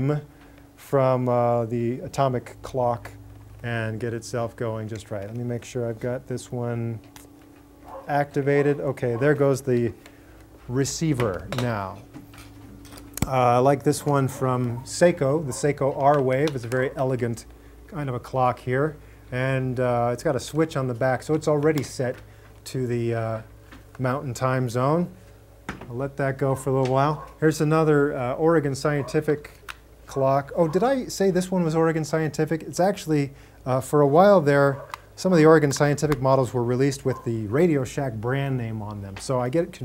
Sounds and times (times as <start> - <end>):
Speech: 0.0 - 7.0, 8.1 - 10.0, 10.7 - 12.1, 13.2 - 25.2, 25.9 - 39.8.